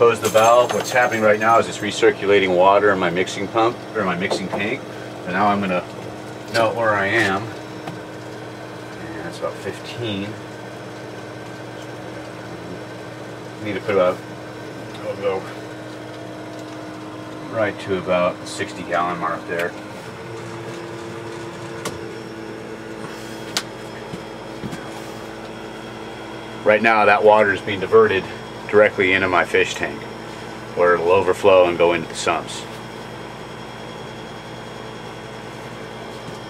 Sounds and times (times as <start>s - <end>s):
Speech: 0.0s - 5.9s, 6.5s - 7.6s, 9.0s - 10.4s, 13.6s - 14.2s, 15.0s - 15.6s, 17.4s - 19.8s, 26.6s - 30.1s, 30.8s - 32.7s.